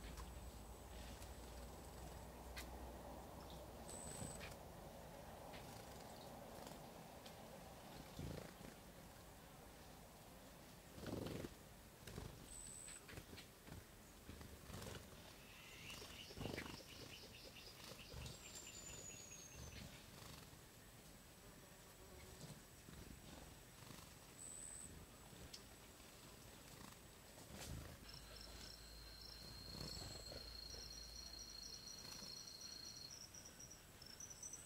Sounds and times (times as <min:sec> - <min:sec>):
Animal: 0:08.0 - 0:08.8, 0:14.3 - 0:20.6, 0:22.2 - 0:34.6.